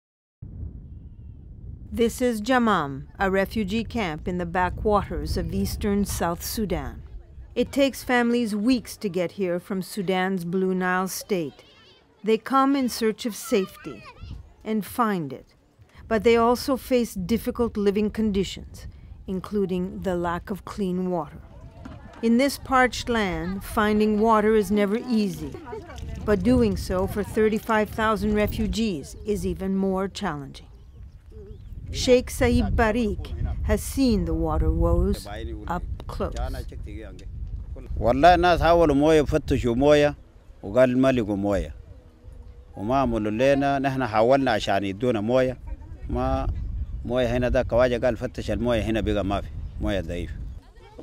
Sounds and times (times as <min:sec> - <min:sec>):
Speech: 0:32.0 - 0:37.3.